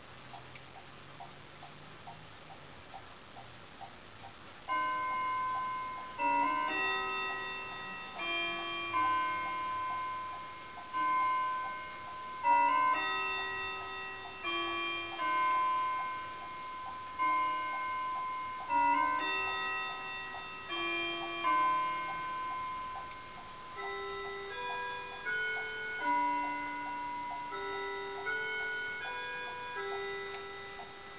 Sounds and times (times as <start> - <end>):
Tick-tock: 0.3 - 31.1.